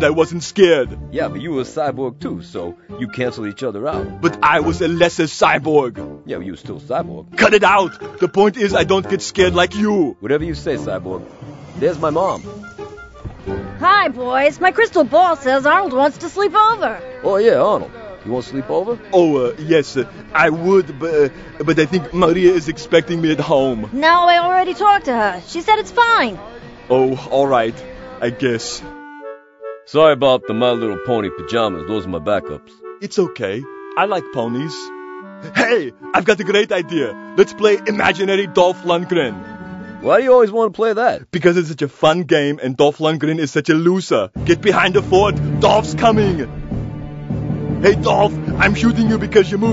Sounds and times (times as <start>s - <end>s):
Speech: 0.0s - 11.2s, 11.8s - 12.4s, 13.8s - 28.9s, 29.9s - 34.9s, 35.5s - 39.4s, 40.0s - 46.5s, 47.8s - 49.7s
Music: 0.0s - 41.2s, 44.3s - 49.7s.